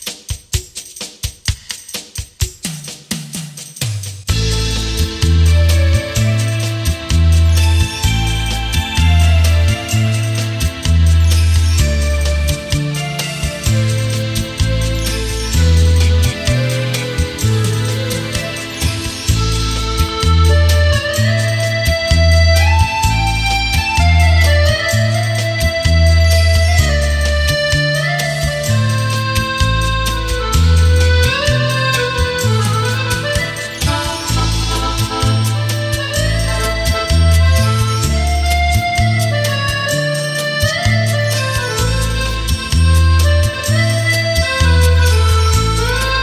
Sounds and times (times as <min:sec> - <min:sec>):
Music: 0:00.0 - 0:46.2.